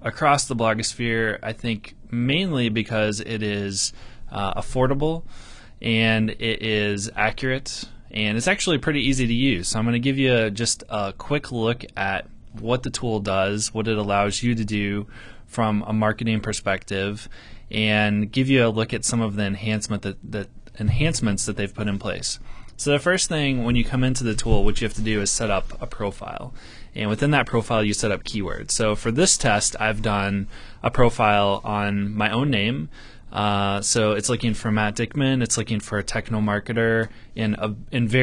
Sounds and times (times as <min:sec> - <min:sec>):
Speech: 0:00.0 - 0:05.2, 0:05.8 - 0:38.2.